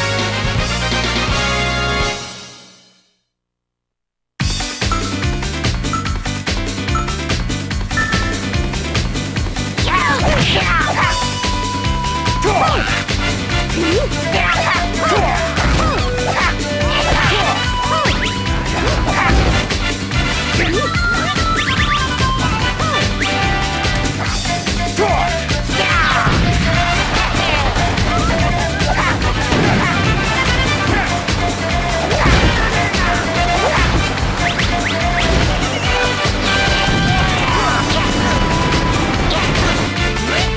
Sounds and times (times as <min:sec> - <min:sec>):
Music: 0:00.0 - 0:03.4, 0:04.4 - 0:40.5.